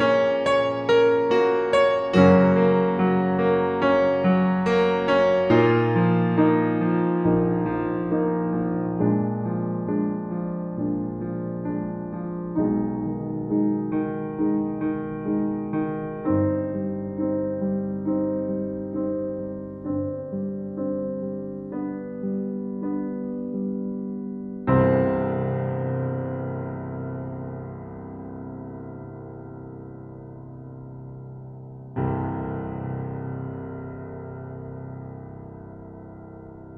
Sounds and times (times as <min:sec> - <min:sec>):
Music: 0:00.0 - 0:36.7.